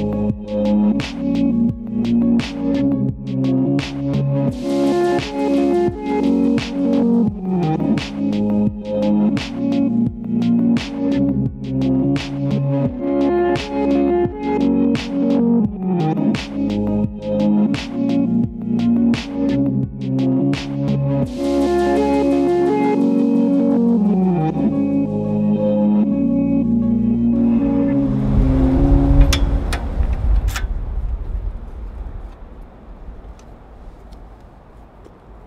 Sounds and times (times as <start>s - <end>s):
Music: 0.0s - 29.8s.